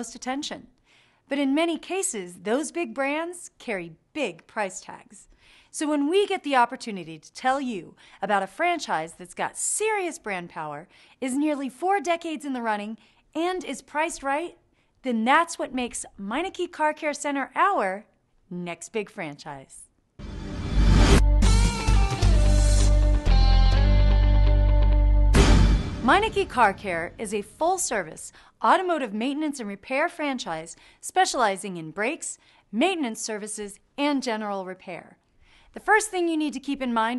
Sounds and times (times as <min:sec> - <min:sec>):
Speech: 0:00.0 - 0:00.7, 0:01.3 - 0:19.9, 0:26.1 - 0:35.2, 0:35.8 - 0:37.1
Music: 0:20.2 - 0:27.3.